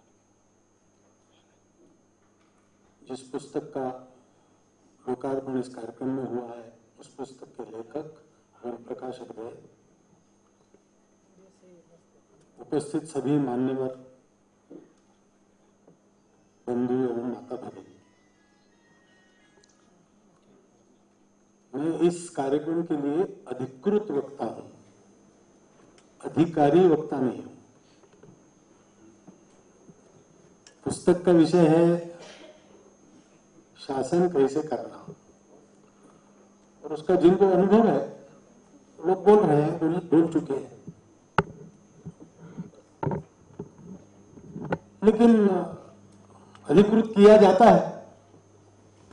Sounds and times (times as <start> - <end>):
Narration, monologue: 0.2 - 18.1, 20.2 - 49.1
Male speech, man speaking: 3.1 - 4.1, 5.1 - 9.7, 12.6 - 14.1, 16.7 - 18.0, 21.8 - 24.8, 26.2 - 27.6, 30.8 - 32.2, 33.8 - 35.2, 36.8 - 38.3, 39.0 - 40.8, 45.0 - 45.9, 46.7 - 48.1.